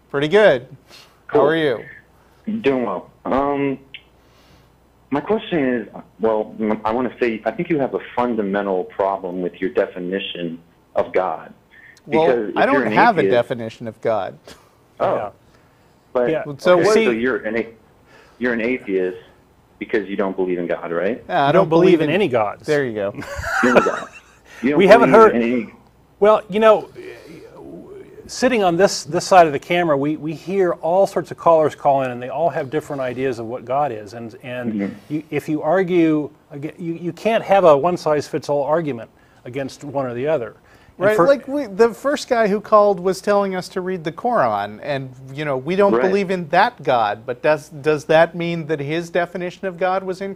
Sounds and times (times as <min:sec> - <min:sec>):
Speech: 0:00.1 - 0:04.0, 0:05.1 - 0:14.4, 0:15.0 - 0:15.4, 0:16.2 - 0:17.8, 0:18.4 - 0:24.0, 0:24.6 - 0:50.3.